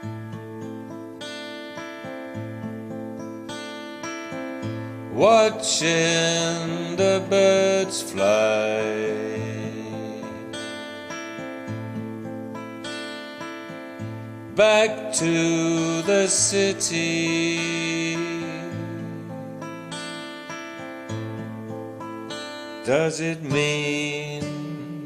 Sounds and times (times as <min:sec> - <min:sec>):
Music: 0:00.0 - 0:25.0.